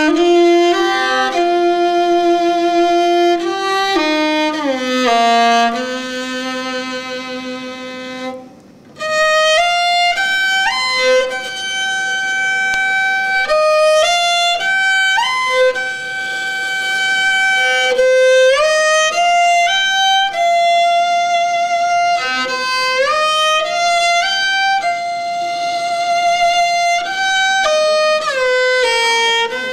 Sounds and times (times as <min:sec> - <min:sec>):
Music: 0:00.0 - 0:29.7.